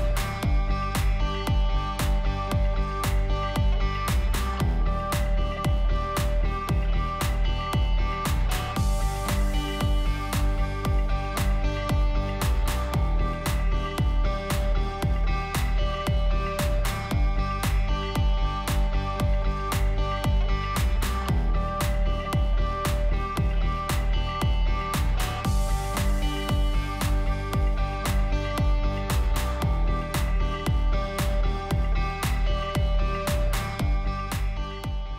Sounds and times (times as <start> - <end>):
Music: 0.0 - 35.1.